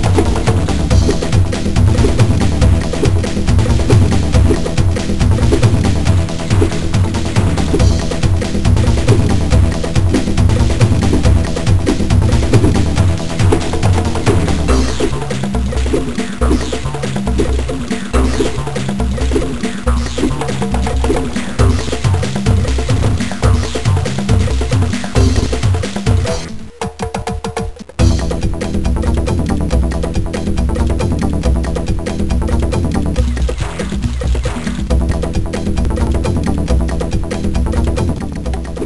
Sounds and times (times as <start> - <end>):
Music: 0.0 - 38.8.